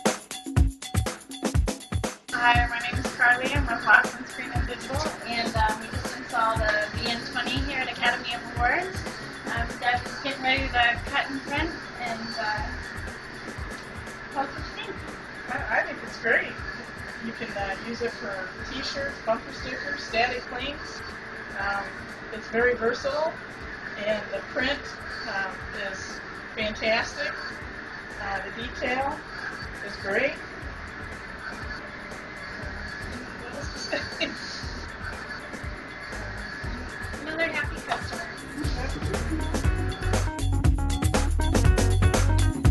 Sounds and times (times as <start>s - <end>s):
Speech: 2.4s - 12.8s, 14.4s - 16.6s, 17.2s - 21.0s, 21.6s - 23.4s, 24.0s - 27.4s, 28.2s - 29.2s, 29.8s - 30.4s, 33.0s - 34.8s, 37.2s - 39.3s.